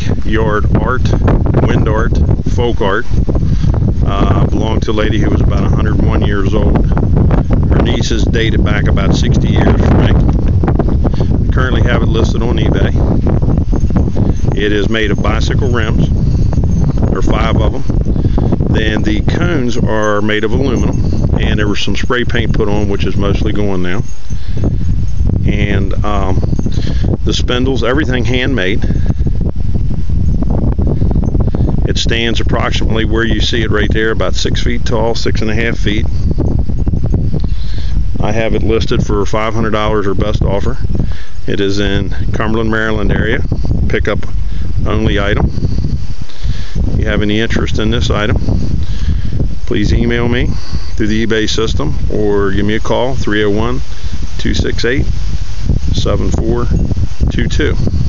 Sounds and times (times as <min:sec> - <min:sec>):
Speech: 0:00.0 - 0:03.1, 0:04.0 - 0:06.8, 0:07.8 - 0:10.2, 0:11.5 - 0:13.0, 0:14.6 - 0:16.1, 0:17.1 - 0:17.9, 0:18.7 - 0:24.0, 0:25.4 - 0:26.4, 0:27.2 - 0:28.9, 0:31.9 - 0:36.1, 0:38.2 - 0:40.8, 0:41.5 - 0:45.5, 0:47.0 - 0:48.4, 0:49.7 - 0:55.1, 0:55.9 - 0:57.8.